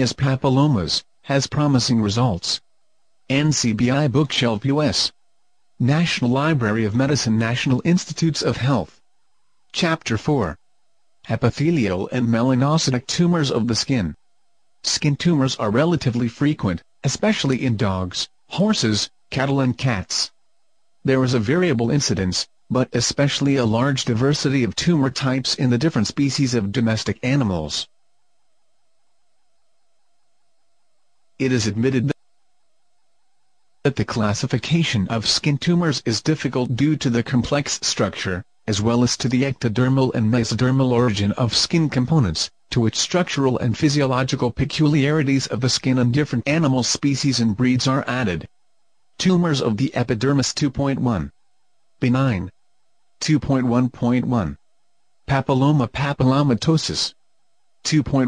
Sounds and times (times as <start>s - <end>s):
Speech: 0.0s - 2.6s, 3.3s - 5.2s, 5.8s - 9.0s, 9.8s - 10.6s, 11.3s - 14.2s, 14.8s - 20.4s, 21.1s - 27.9s, 31.4s - 32.2s, 33.9s - 48.5s, 49.2s - 51.3s, 52.0s - 52.6s, 53.2s - 54.6s, 55.3s - 57.2s, 57.8s - 58.2s.